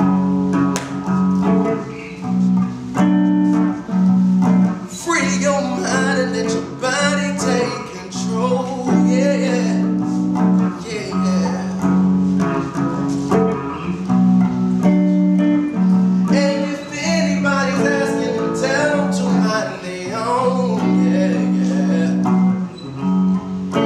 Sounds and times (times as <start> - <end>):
Music: 0.0 - 23.8.